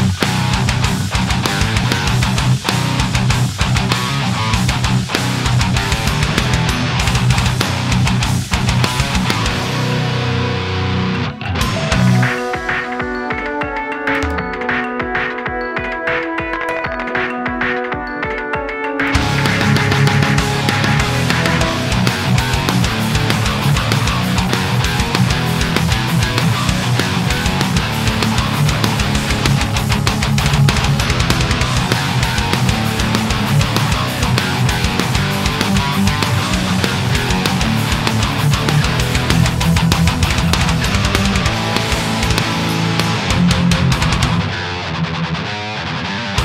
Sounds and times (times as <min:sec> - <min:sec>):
Heavy metal: 0:00.0 - 0:46.4.